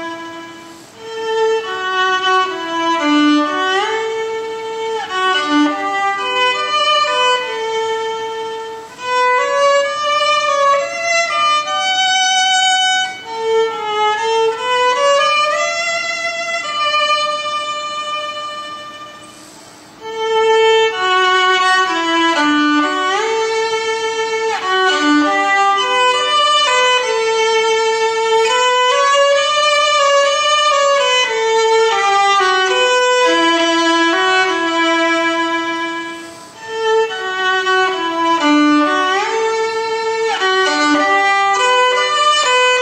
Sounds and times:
Violin, fiddle: 0.0 - 42.8.

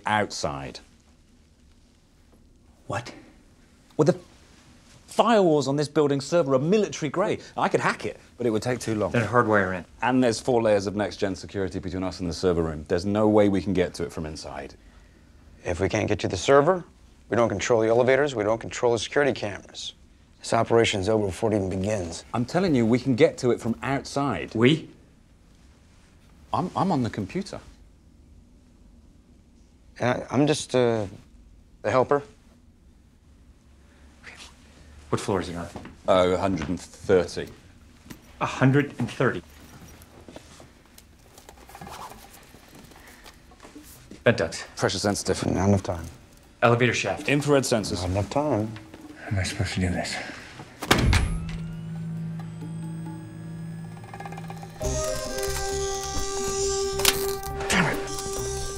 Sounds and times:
Speech: 0.0 - 0.9, 5.1 - 14.8, 15.6 - 25.0, 26.5 - 27.7, 30.0 - 31.2, 35.1 - 37.6, 38.4 - 39.4, 44.2 - 50.4.

